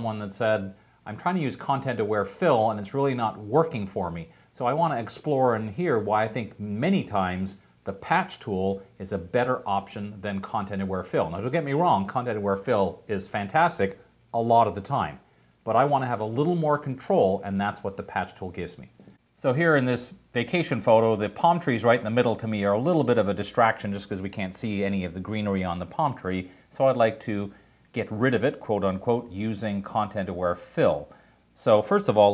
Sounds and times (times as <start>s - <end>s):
Speech: 0.0s - 32.3s.